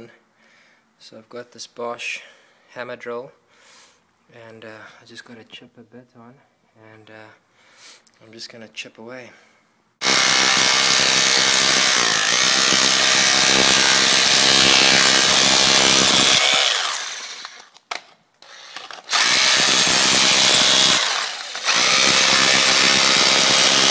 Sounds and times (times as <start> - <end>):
Power tool: 10.0 - 17.7, 18.4 - 23.9.